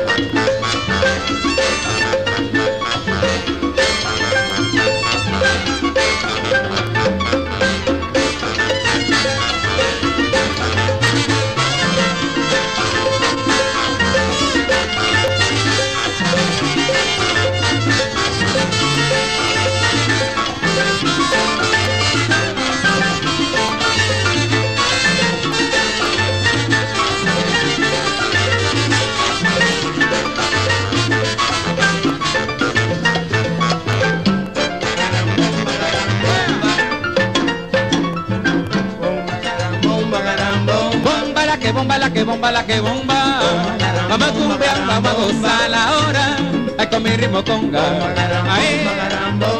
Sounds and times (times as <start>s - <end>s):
Music of Latin America: 0.0s - 49.5s.